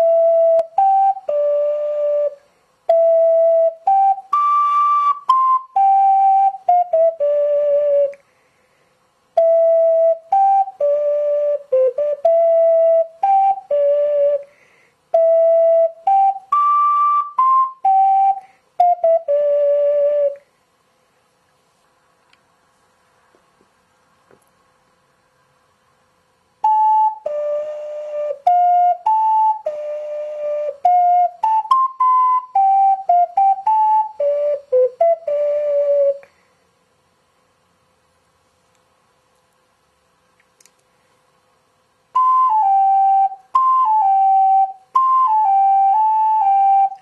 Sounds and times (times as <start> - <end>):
Music: 0.0 - 8.2, 9.3 - 20.4, 26.6 - 36.3, 42.1 - 47.0.